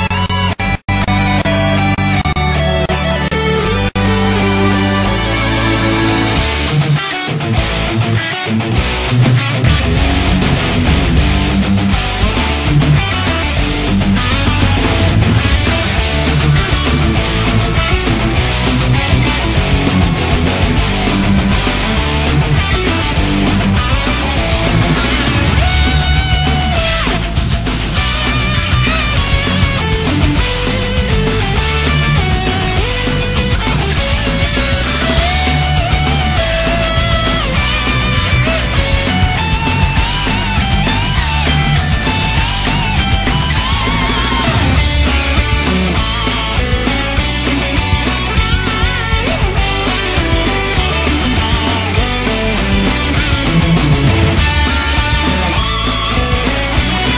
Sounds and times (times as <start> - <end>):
Bass guitar: 0.0 - 57.1
Electric guitar: 0.0 - 57.1
Strum: 1.2 - 57.1.